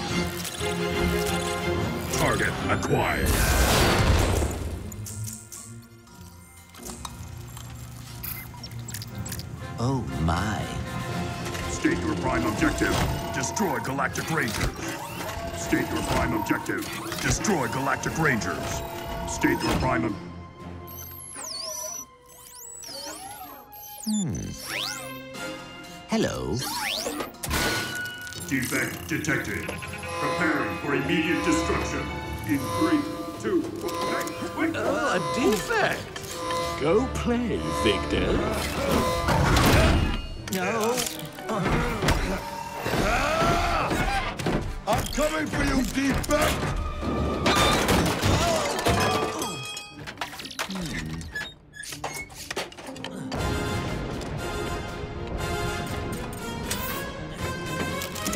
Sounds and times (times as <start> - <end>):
Music: 0.0 - 58.3.